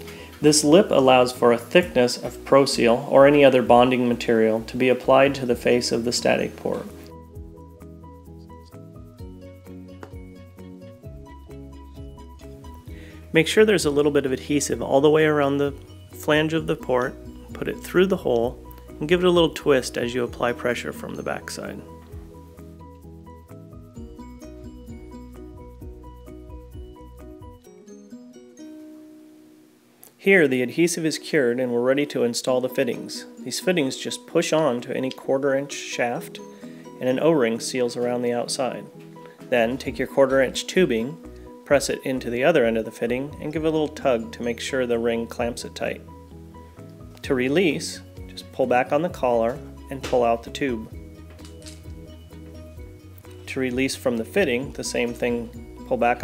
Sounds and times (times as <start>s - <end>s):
Music: 0.0s - 56.2s
Speech: 0.4s - 7.0s, 13.4s - 21.9s, 30.2s - 36.4s, 37.0s - 38.9s, 39.5s - 46.0s, 47.3s - 50.9s, 53.5s - 56.2s.